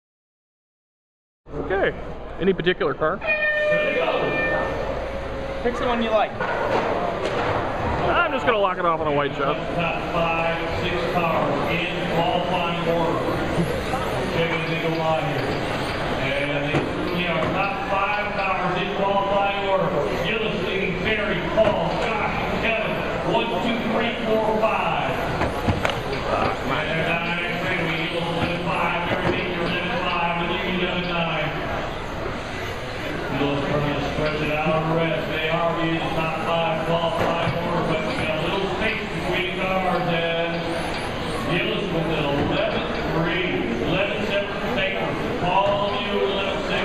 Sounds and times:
Speech: 1.5 - 4.6, 5.6 - 6.4, 8.0 - 15.5, 16.2 - 25.2, 26.2 - 31.7, 33.0 - 40.8, 41.4 - 46.8.

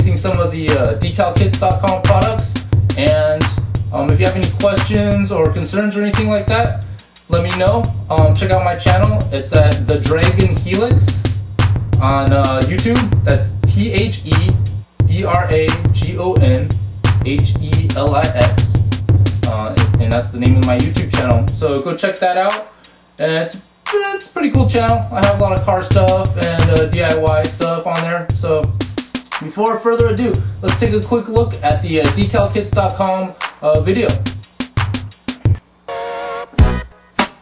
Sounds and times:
Speech: 0.0 - 11.1, 12.0 - 18.8, 19.4 - 28.7, 29.4 - 34.2
Music: 0.0 - 37.4.

